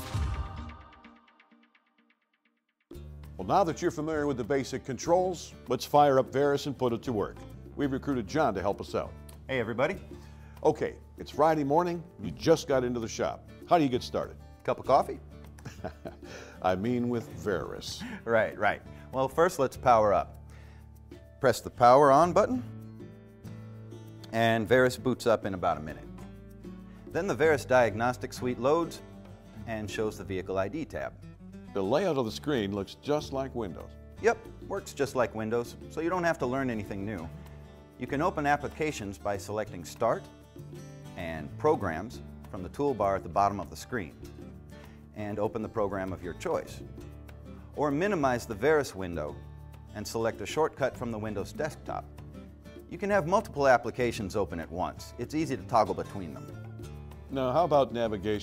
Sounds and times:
Music: 0.0 - 58.4
Speech: 3.4 - 15.2, 16.6 - 20.3, 21.4 - 22.7, 24.3 - 26.1, 27.1 - 29.0, 29.6 - 31.2, 31.8 - 37.3, 38.0 - 40.2, 41.2 - 44.2, 45.2 - 46.8, 47.8 - 49.4, 50.0 - 52.1, 52.9 - 56.6, 57.3 - 58.4.

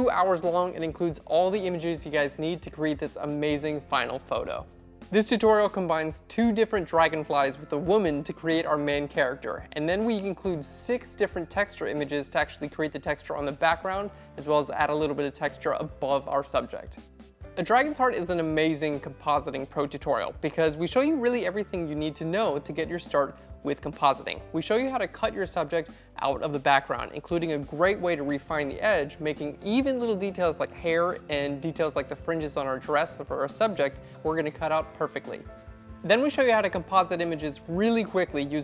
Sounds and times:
Speech: 0.0 - 17.0, 17.6 - 38.6
Music: 0.0 - 38.6.

